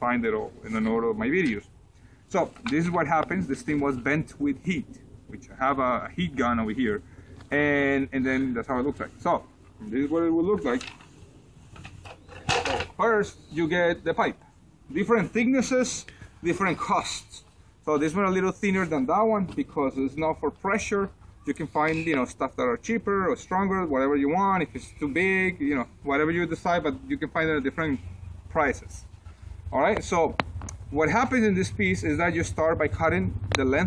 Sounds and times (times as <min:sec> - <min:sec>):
Speech: 0:00.0 - 0:01.7, 0:02.3 - 0:10.9, 0:12.9 - 0:29.1, 0:29.7 - 0:33.8.